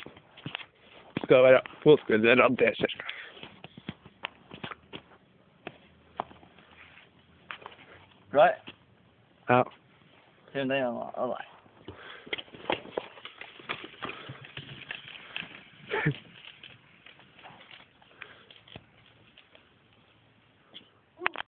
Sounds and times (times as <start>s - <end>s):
Bicycle: 0.0s - 8.8s, 11.6s - 21.4s.